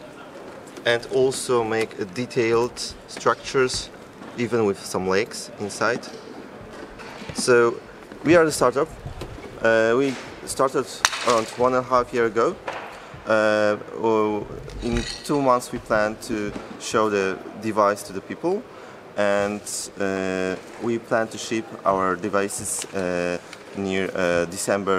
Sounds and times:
Speech: 0.0 - 6.2, 7.4 - 9.0, 9.6 - 12.6, 13.3 - 24.9.

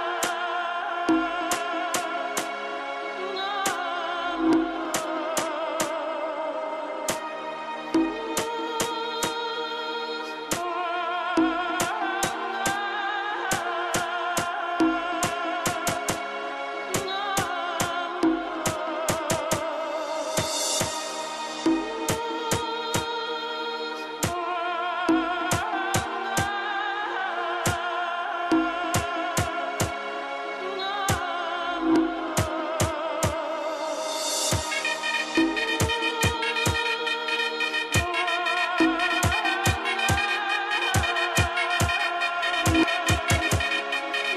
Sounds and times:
Music: 0.0 - 44.3.

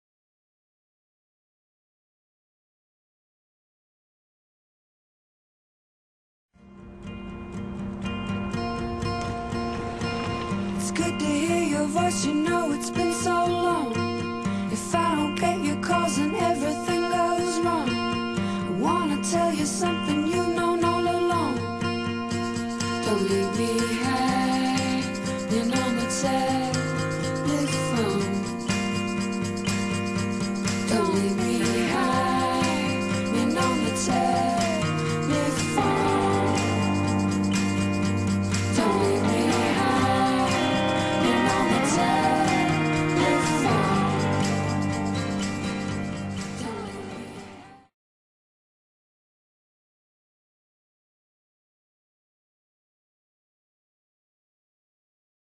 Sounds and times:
Music: 6.6 - 47.9.

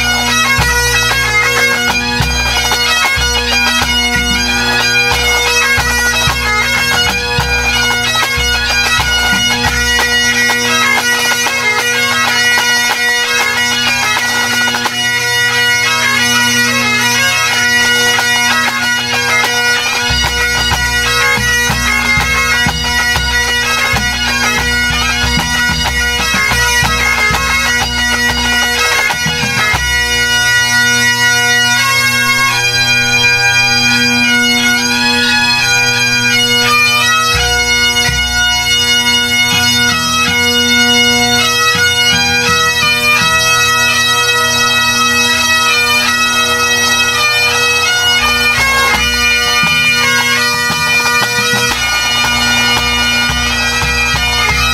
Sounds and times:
Bagpipes: 0.0 - 54.7
Wind instrument, woodwind instrument: 0.0 - 54.7.

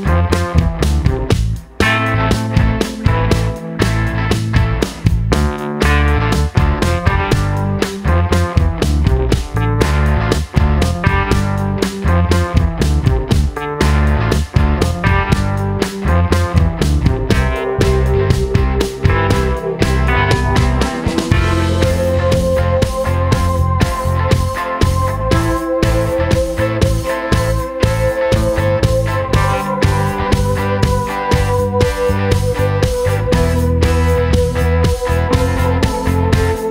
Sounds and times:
Music: 0.0 - 36.7.

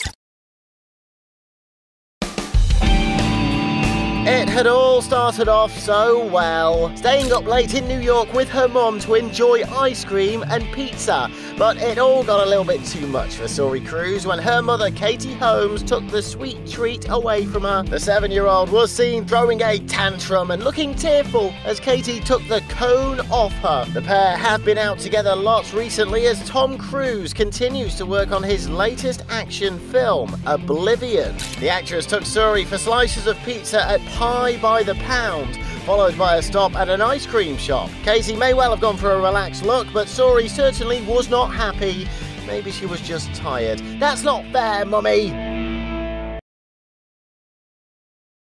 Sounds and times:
Music: 2.2 - 46.4
Speech: 4.2 - 45.4.

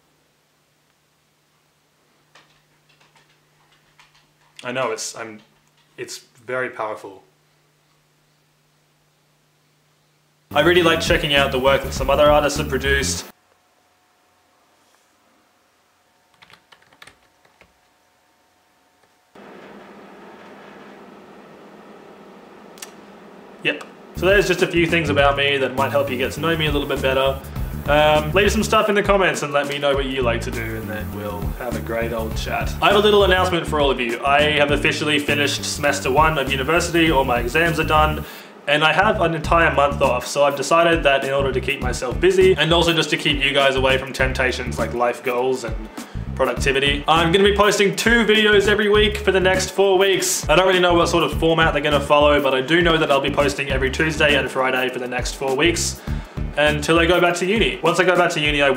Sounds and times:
Computer keyboard: 2.4 - 4.6, 16.3 - 17.8.

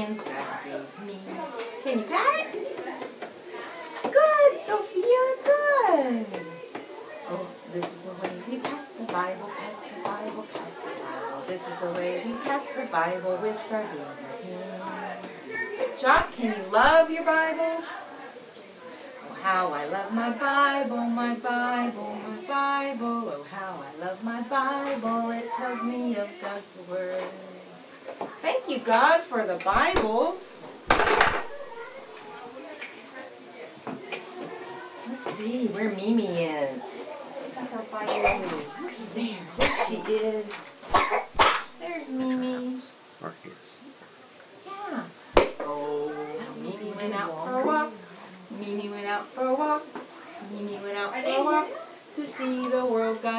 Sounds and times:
Child speech, kid speaking: 3.8 - 7.6, 8.5 - 16.0, 25.4 - 26.5, 31.5 - 40.2, 44.6 - 45.1, 45.8 - 47.8, 49.9 - 53.2.

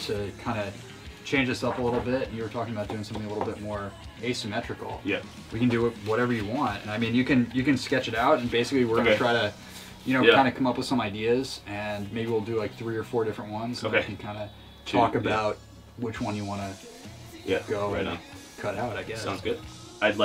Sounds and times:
Speech: 0.0 - 16.8, 17.4 - 20.2
Music: 0.0 - 20.2.

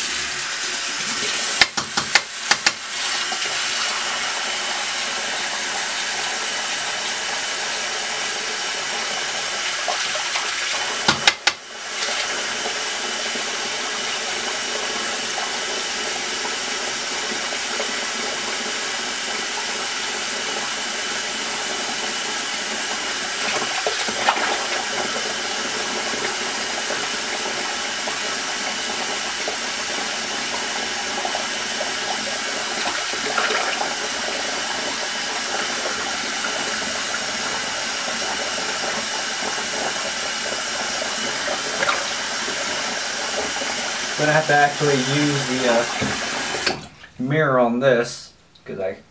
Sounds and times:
Speech: 44.2 - 46.0, 47.2 - 49.1.

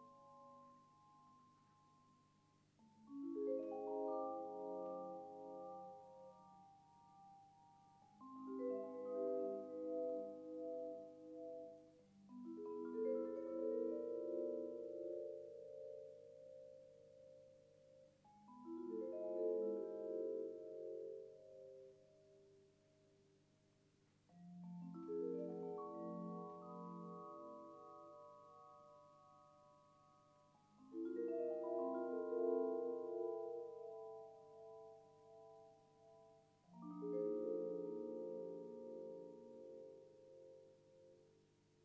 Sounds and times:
Vibraphone: 2.9 - 22.1, 24.3 - 41.1.

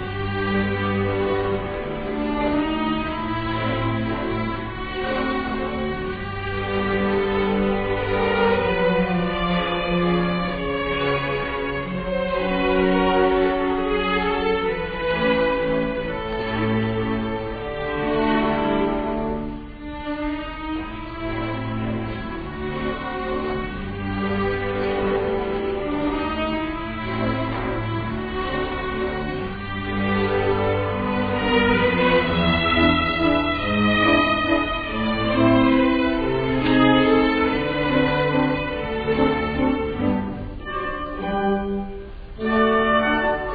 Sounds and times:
Opera: 0.0 - 43.5.

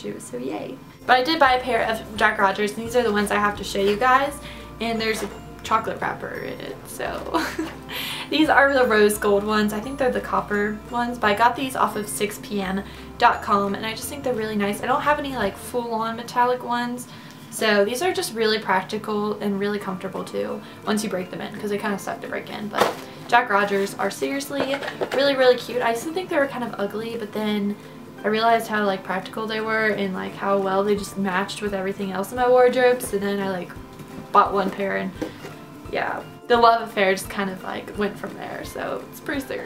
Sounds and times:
Speech: 0.0 - 7.4, 8.3 - 33.8, 34.4 - 35.1, 35.9 - 39.6
Music: 0.0 - 39.6.

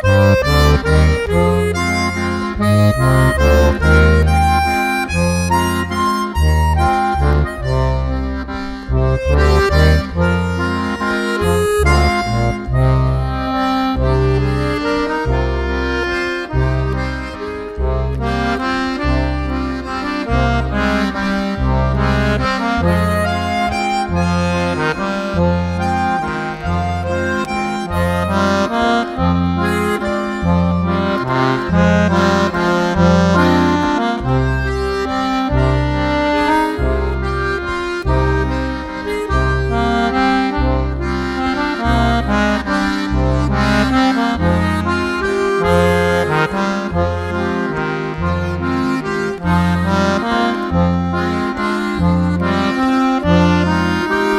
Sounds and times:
Accordion: 0.0 - 54.3.

